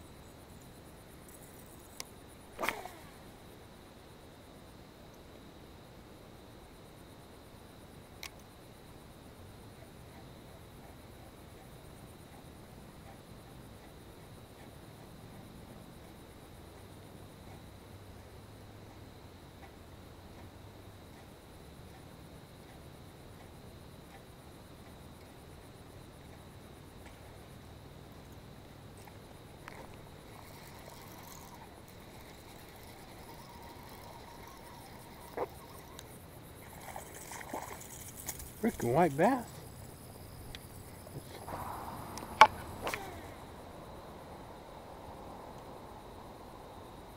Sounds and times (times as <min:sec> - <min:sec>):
Speech: 0:38.6 - 0:39.6.